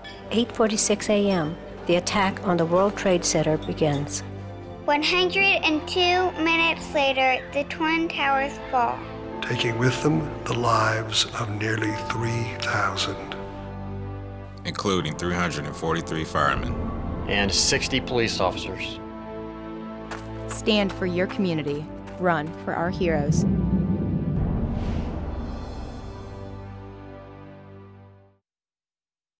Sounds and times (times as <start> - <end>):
Music: 0.0 - 28.4.